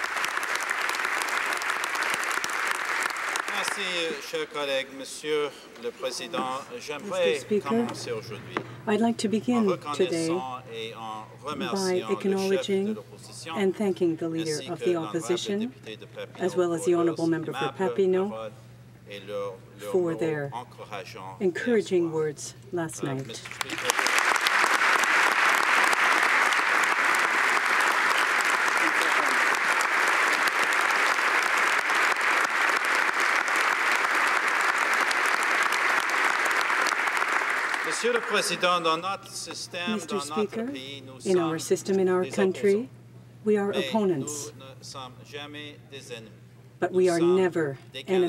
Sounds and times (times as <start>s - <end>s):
Narration, monologue: 3.4s - 24.0s, 37.9s - 48.2s
Male speech, man speaking: 3.5s - 8.7s, 9.4s - 21.4s, 22.9s - 24.0s, 37.9s - 42.9s, 43.6s - 48.2s
Female speech, woman speaking: 6.4s - 8.1s, 8.8s - 10.4s, 11.6s - 15.8s, 16.4s - 18.4s, 19.8s - 20.6s, 21.4s - 23.4s, 39.9s - 44.6s, 46.8s - 48.2s.